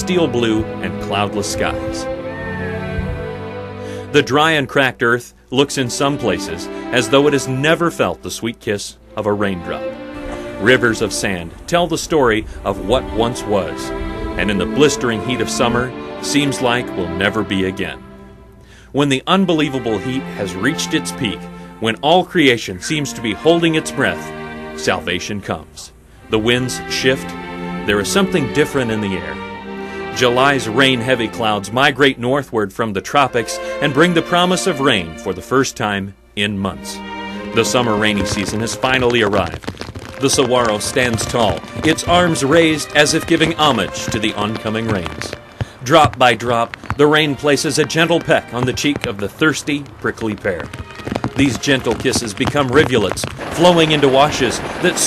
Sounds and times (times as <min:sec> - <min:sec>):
Speech: 0:00.0 - 0:02.1, 0:04.0 - 0:09.9, 0:10.6 - 0:18.0, 0:18.9 - 0:29.4, 0:30.1 - 0:37.0, 0:37.6 - 0:39.6, 0:40.2 - 0:50.7, 0:51.4 - 0:55.0
Music: 0:00.0 - 0:55.0.